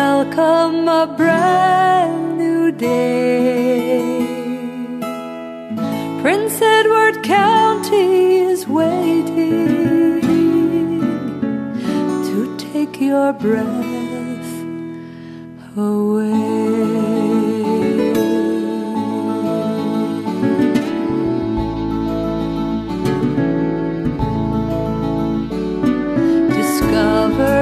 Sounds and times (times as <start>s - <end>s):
Acoustic guitar: 0.0s - 27.6s.